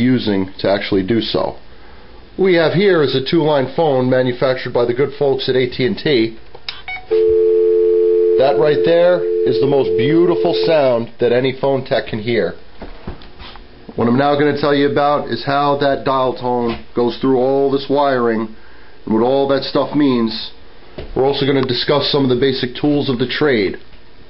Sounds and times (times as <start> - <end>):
Speech: 0.0 - 1.6, 2.4 - 6.4, 8.4 - 12.6, 14.0 - 20.6, 21.2 - 23.8
Dial tone: 6.9 - 10.8.